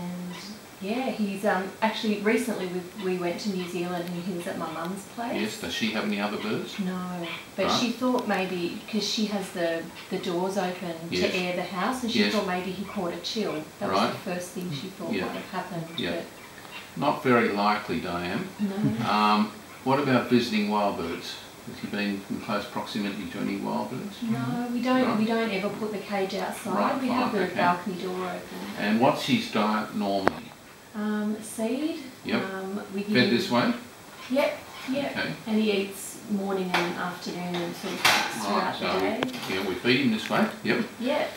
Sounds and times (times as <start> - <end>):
Speech: 0.0 - 16.3, 17.0 - 41.3.